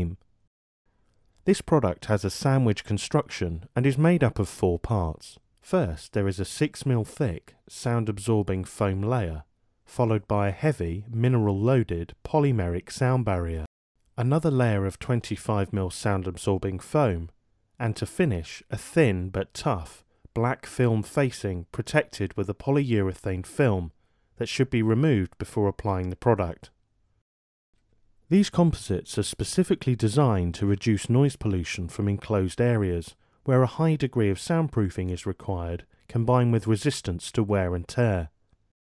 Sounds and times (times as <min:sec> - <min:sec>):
Speech: 0:00.0 - 0:00.2, 0:01.4 - 0:26.8, 0:28.3 - 0:38.4.